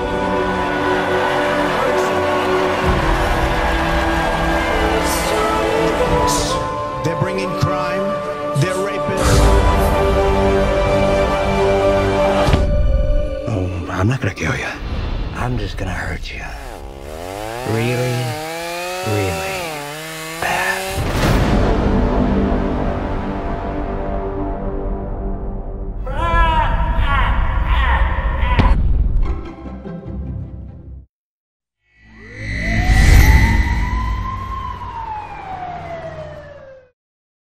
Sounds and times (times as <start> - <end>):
Chainsaw: 16.6 - 21.4.